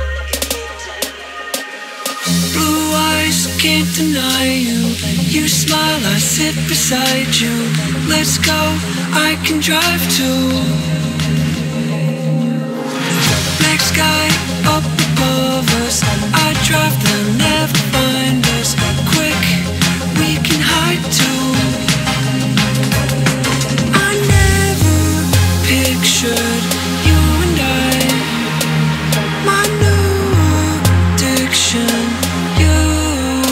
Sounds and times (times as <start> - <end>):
Dubstep: 0.0 - 33.5.